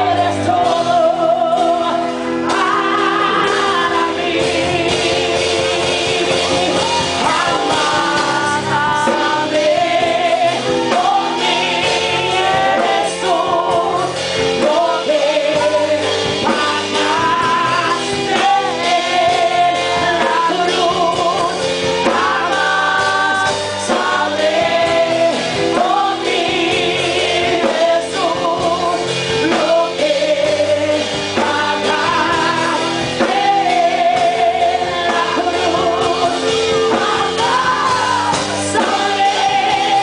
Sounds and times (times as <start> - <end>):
Female singing: 0.0 - 4.9, 7.2 - 15.9, 16.5 - 40.0
Music: 0.0 - 40.0.